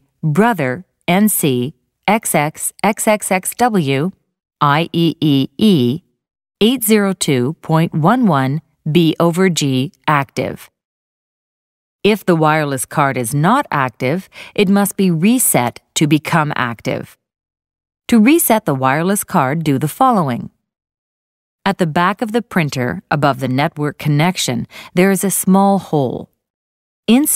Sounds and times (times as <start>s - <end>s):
Speech: 0.2s - 6.0s, 6.6s - 10.7s, 12.1s - 17.2s, 18.1s - 20.6s, 21.7s - 26.3s, 27.1s - 27.3s.